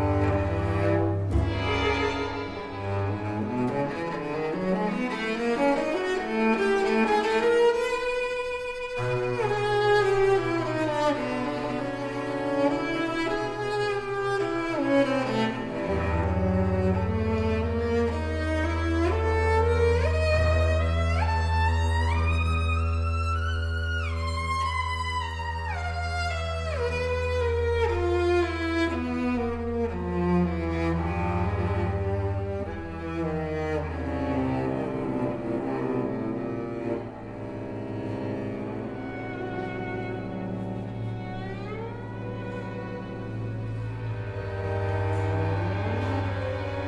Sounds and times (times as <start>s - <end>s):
Cello: 0.0s - 46.8s.